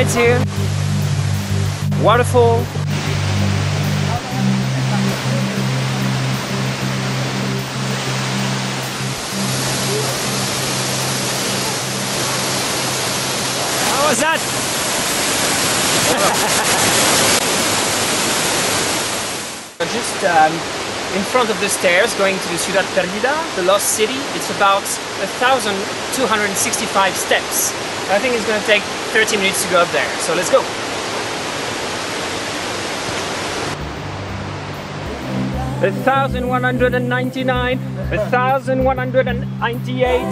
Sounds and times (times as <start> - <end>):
Speech: 0.0 - 0.4, 2.0 - 2.7, 13.8 - 14.4, 19.8 - 30.7, 35.7 - 40.3
Outside, rural or natural: 0.0 - 40.3.